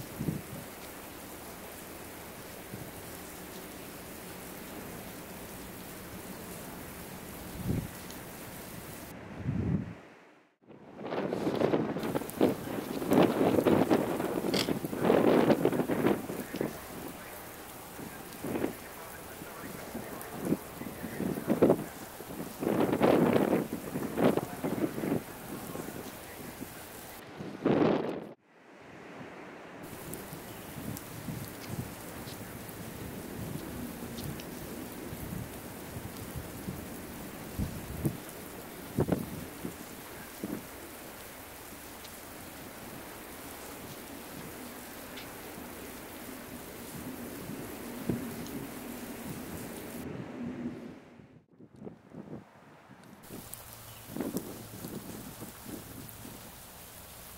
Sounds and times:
Rain on surface: 0:00.0 - 0:09.2, 0:10.0 - 0:51.2, 0:52.5 - 0:57.3
Raindrop: 0:00.0 - 0:09.2, 0:10.8 - 0:28.4, 0:29.8 - 0:50.9, 0:53.0 - 0:57.3.

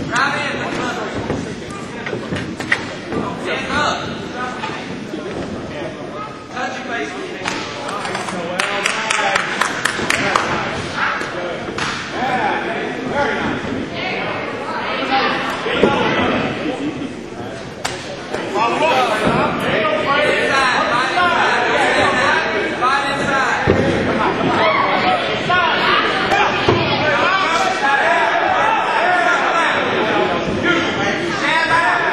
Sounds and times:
Inside, large room or hall: 0:00.0 - 0:32.1
Speech: 0:00.0 - 0:32.1.

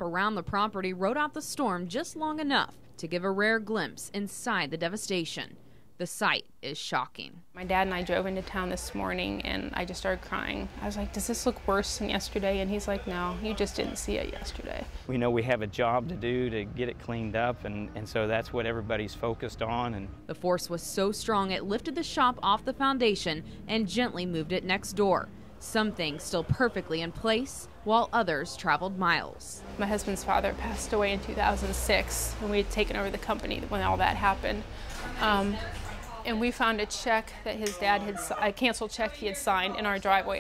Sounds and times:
Speech: 0:00.0 - 0:34.6.

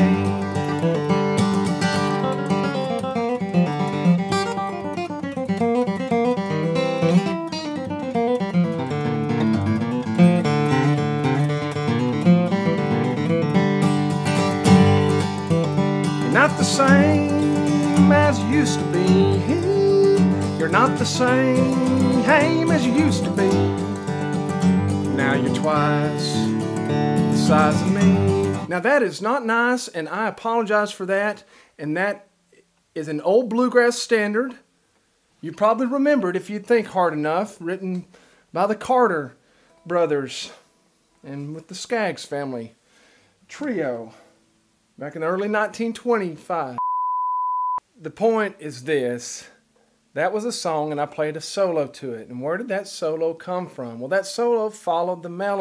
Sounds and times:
Bluegrass: 0:00.0 - 0:29.1
Strum: 0:08.5 - 0:28.7.

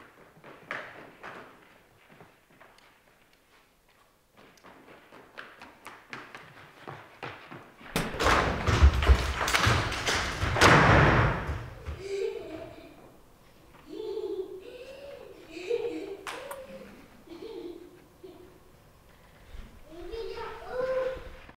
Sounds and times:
Speech: 0:19.9 - 0:21.4.

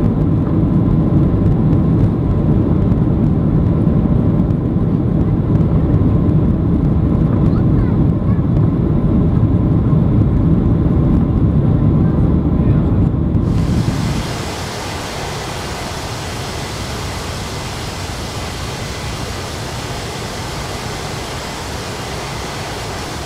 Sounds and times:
Fixed-wing aircraft, airplane: 0:00.0 - 0:23.2.

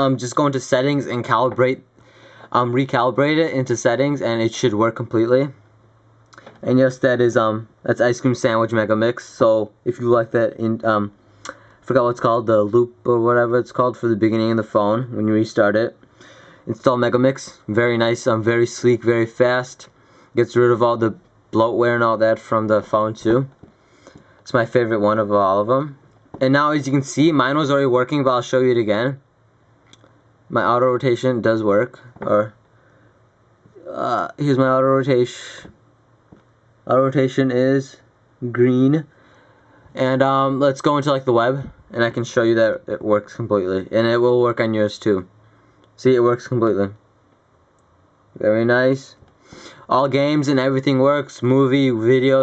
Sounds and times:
Speech: 0:00.0 - 0:01.9, 0:02.5 - 0:05.6, 0:06.4 - 0:16.0, 0:16.7 - 0:23.7, 0:24.5 - 0:29.3, 0:30.5 - 0:32.6, 0:33.7 - 0:35.8, 0:36.9 - 0:39.1, 0:40.0 - 0:45.4, 0:46.0 - 0:47.0, 0:48.4 - 0:49.2, 0:49.8 - 0:52.4.

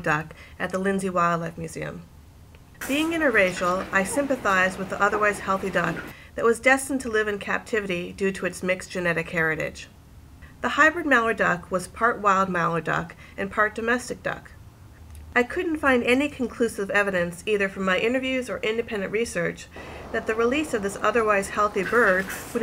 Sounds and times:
Speech: 0:00.0 - 0:02.1, 0:02.8 - 0:09.9, 0:10.6 - 0:14.5, 0:15.4 - 0:22.6.

